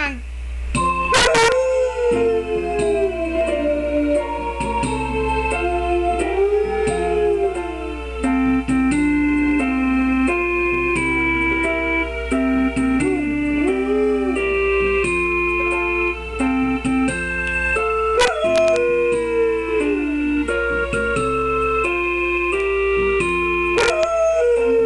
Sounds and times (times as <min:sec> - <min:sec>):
Music: 0:00.6 - 0:24.8.